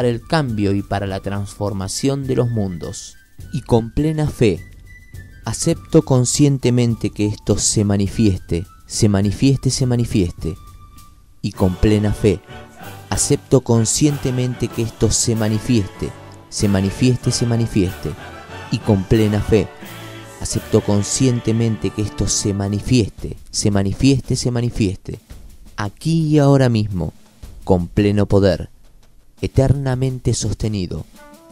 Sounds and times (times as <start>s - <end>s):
Speech: 0.0s - 4.7s, 5.5s - 10.6s, 11.5s - 12.4s, 13.0s - 19.7s, 20.4s - 28.7s, 29.4s - 31.1s
Music: 0.0s - 31.5s.